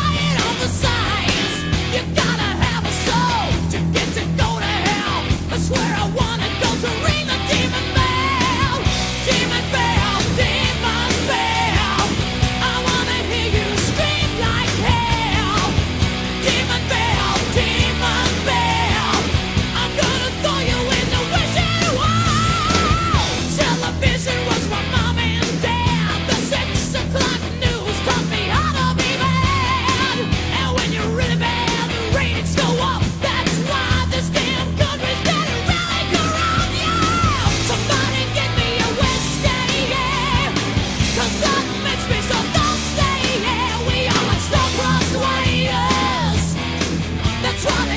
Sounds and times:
Music: 0.0 - 47.9.

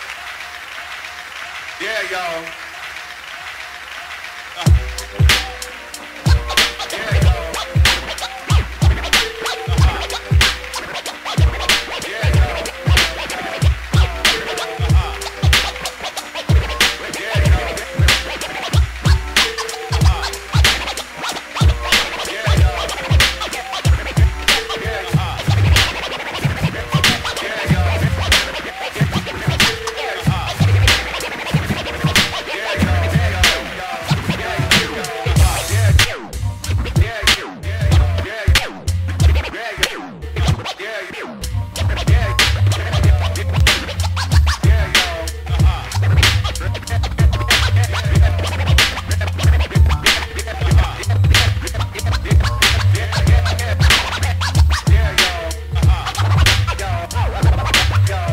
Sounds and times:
Scratching (performance technique): 0.0 - 58.3.

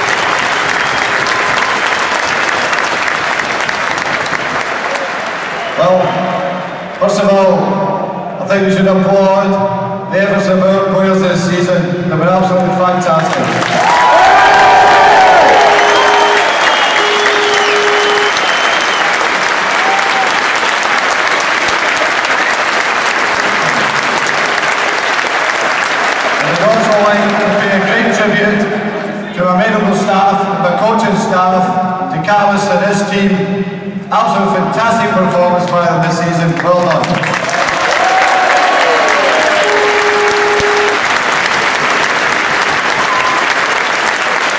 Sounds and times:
Male speech, man speaking: 5.8 - 6.2, 7.0 - 13.5, 26.4 - 33.5, 34.1 - 37.2
Narration, monologue: 26.4 - 37.1.

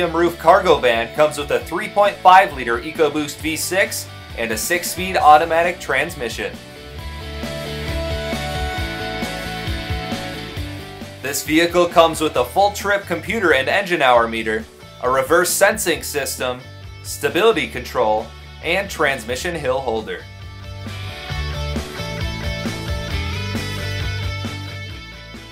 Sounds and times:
Speech: 0.0 - 6.6, 11.2 - 20.3
Music: 0.0 - 25.5.

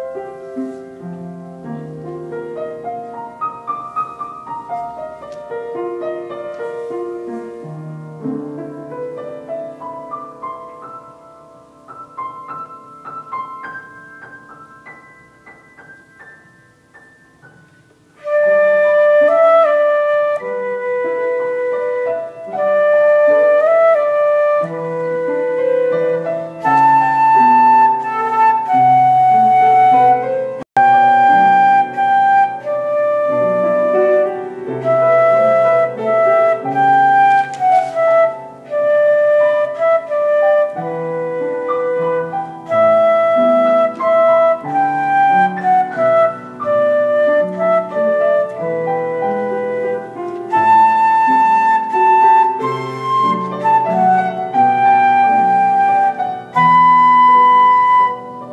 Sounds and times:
Flute: 0.0 - 15.0, 18.2 - 58.5.

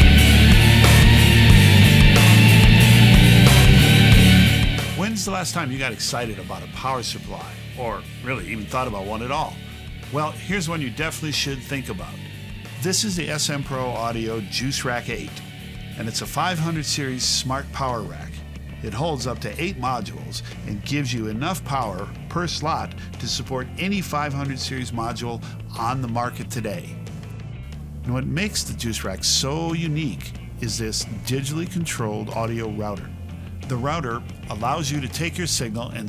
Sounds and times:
Music: 0.0 - 36.0
Speech: 5.0 - 12.2, 12.8 - 15.4, 16.0 - 27.0, 28.1 - 36.0.

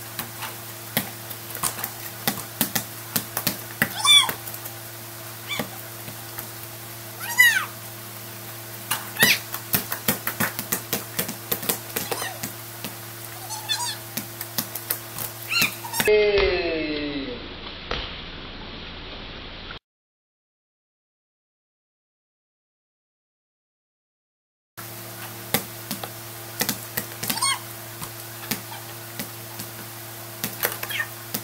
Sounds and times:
Basketball bounce: 0.9 - 4.4, 9.2 - 13.0, 25.5 - 29.8
Speech: 16.0 - 17.5.

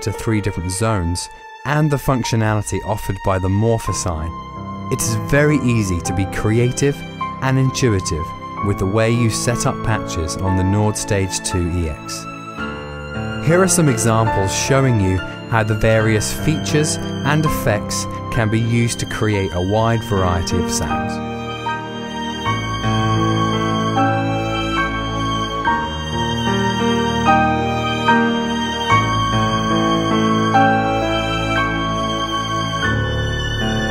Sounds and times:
Speech: 0.0 - 12.3, 13.4 - 21.2
Background music: 0.0 - 33.9.

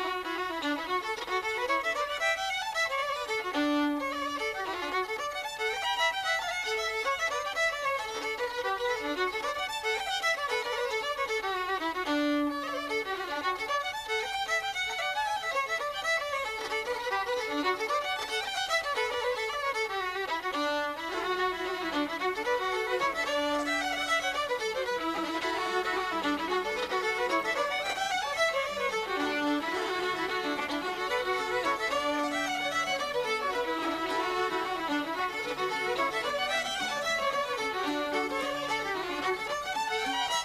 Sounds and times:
Violin, fiddle: 0.0 - 40.4.

